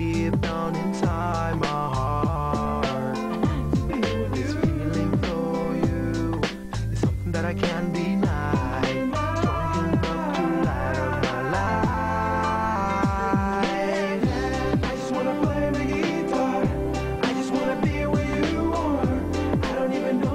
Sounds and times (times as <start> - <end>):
Acoustic guitar: 0.0 - 20.3.